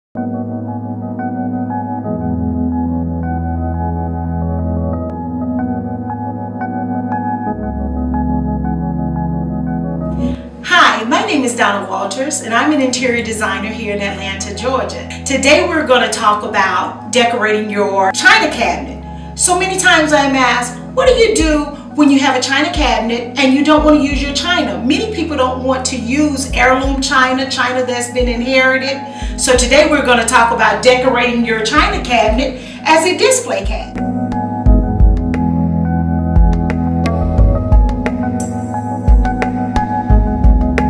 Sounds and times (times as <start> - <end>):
Ambient music: 0.2 - 10.6, 33.8 - 40.8.